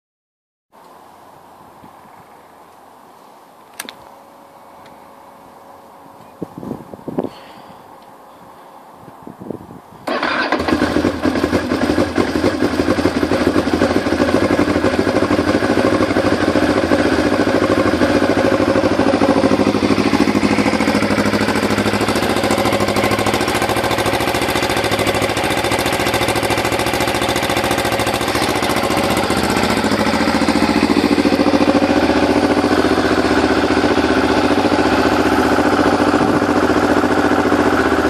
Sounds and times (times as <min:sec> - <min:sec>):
Motorcycle: 0:03.7 - 0:38.0.